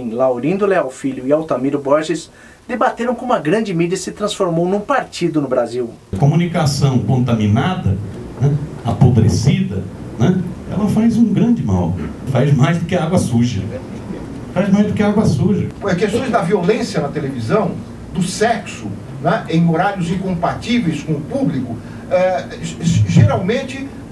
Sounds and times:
Speech: 0:00.0 - 0:24.0.

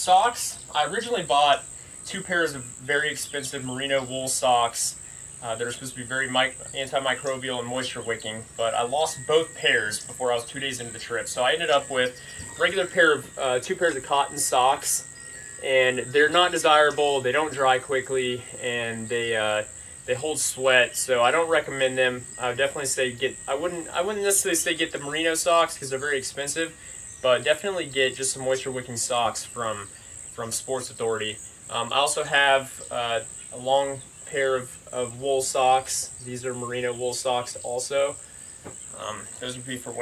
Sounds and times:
Speech: 0:00.0 - 0:38.2, 0:39.0 - 0:40.0.

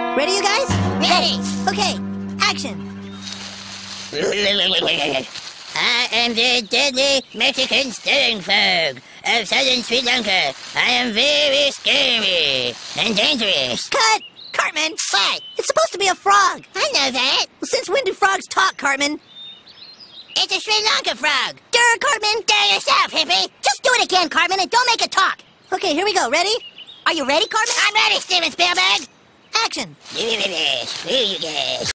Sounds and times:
Speech: 0:00.0 - 0:02.8, 0:04.2 - 0:19.2, 0:20.4 - 0:31.9.

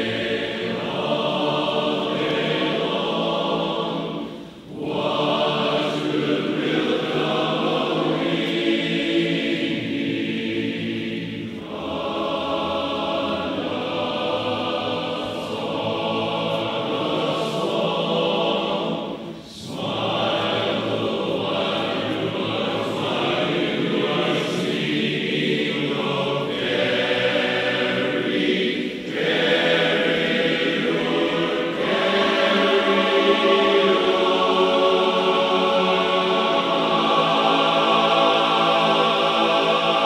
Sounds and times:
Choir: 0:00.0 - 0:40.0.

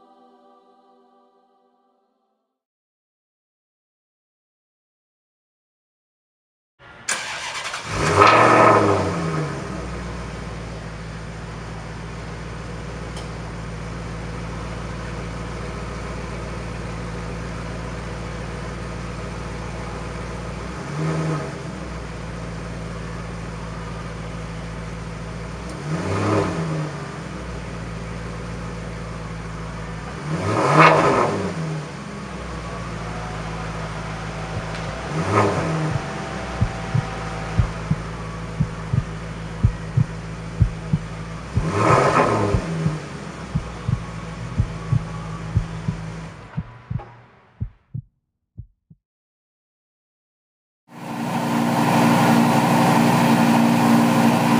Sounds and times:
Car: 0:06.8 - 0:47.6, 0:50.9 - 0:54.6.

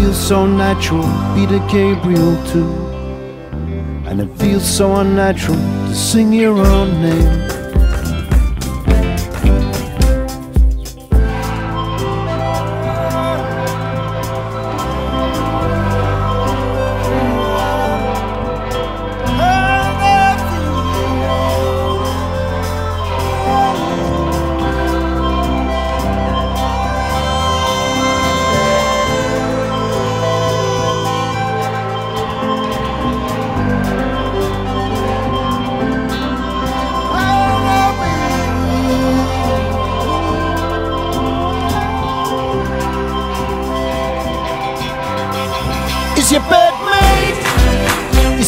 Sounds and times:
Singing: 0:00.0 - 0:03.0, 0:11.3 - 0:31.6, 0:37.0 - 0:48.4
Music: 0:00.0 - 0:48.4.

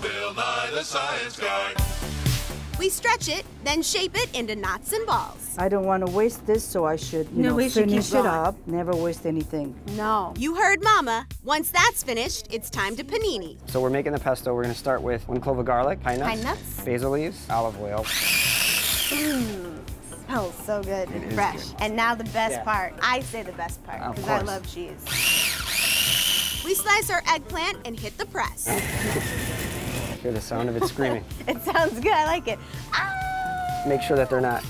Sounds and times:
Music: 0:00.0 - 0:34.7
Blender: 0:18.0 - 0:19.7, 0:25.1 - 0:26.8, 0:28.7 - 0:30.2.

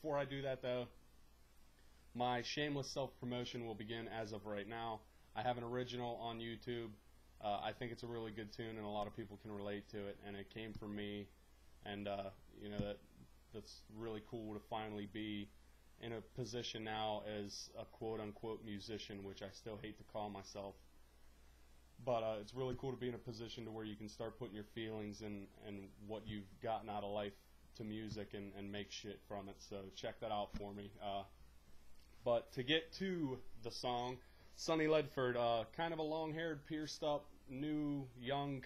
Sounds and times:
Speech: 0:00.0 - 0:01.0, 0:02.2 - 0:20.9, 0:22.0 - 0:31.4, 0:32.2 - 0:38.6.

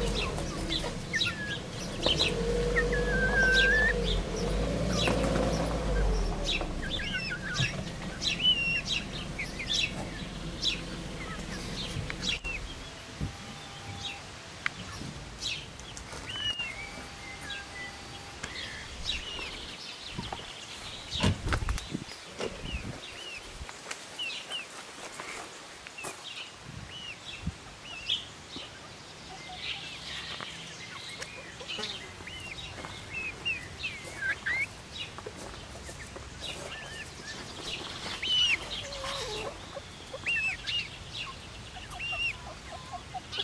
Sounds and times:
Bird: 0:00.0 - 0:23.5, 0:26.0 - 0:43.4
Outside, rural or natural: 0:00.0 - 0:43.4.

